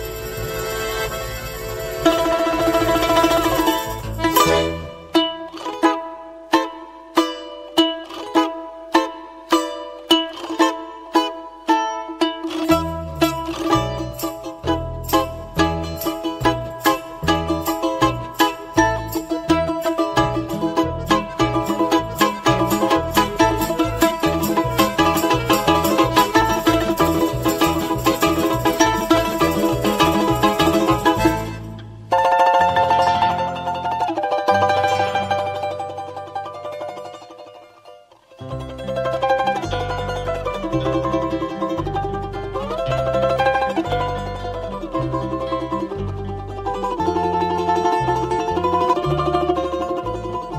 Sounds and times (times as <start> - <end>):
Music: 0.0 - 50.5.